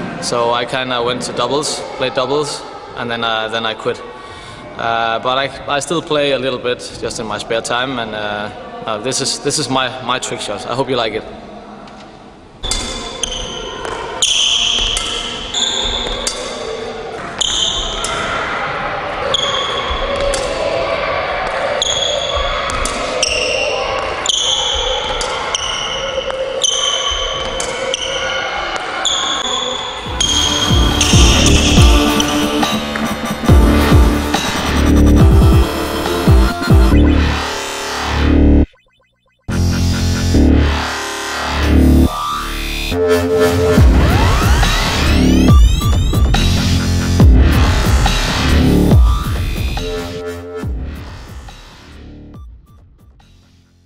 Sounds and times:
Music: 30.1s - 38.7s, 39.5s - 53.8s.

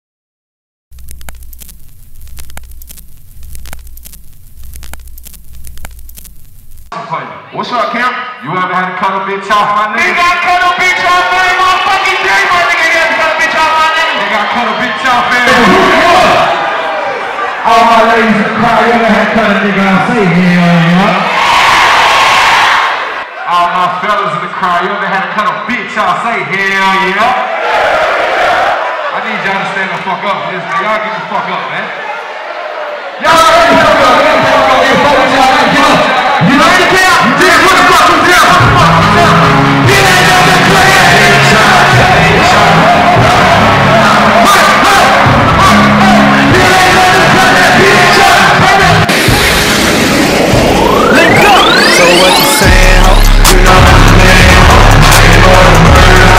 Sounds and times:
Speech: 7.0s - 16.5s, 17.6s - 21.2s, 23.5s - 27.4s, 29.1s - 31.9s, 33.2s - 42.6s, 44.0s - 49.1s.

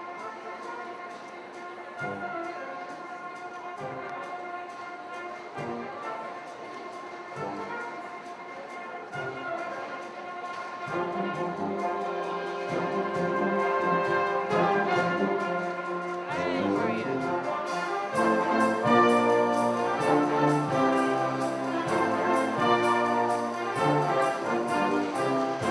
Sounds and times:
Music: 0.0s - 25.7s.

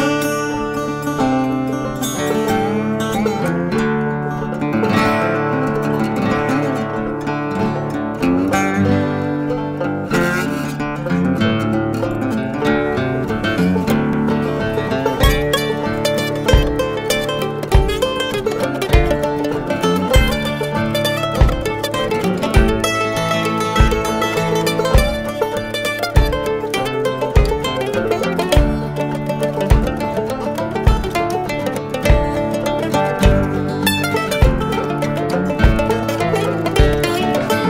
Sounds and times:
Rhythm and blues: 0.0s - 37.6s.

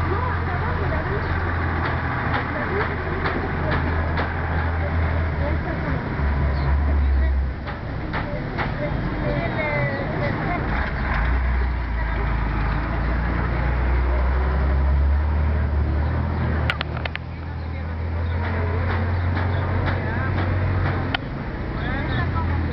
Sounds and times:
Speech: 0.0s - 16.0s, 17.2s - 22.7s.

